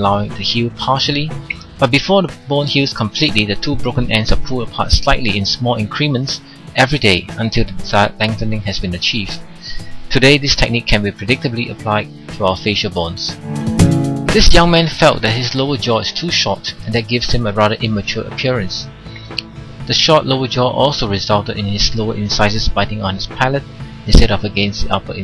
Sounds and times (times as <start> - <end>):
Speech: 0.0 - 13.4, 14.3 - 18.9, 19.9 - 25.2
Music: 0.0 - 25.2.